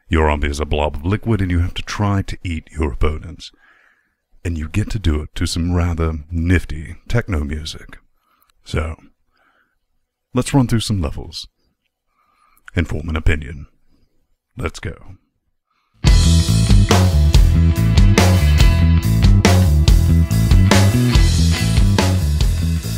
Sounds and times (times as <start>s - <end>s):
Speech: 0.0s - 3.6s, 4.4s - 9.2s, 10.3s - 11.6s, 12.7s - 13.8s, 14.6s - 15.3s
Music: 16.0s - 22.9s.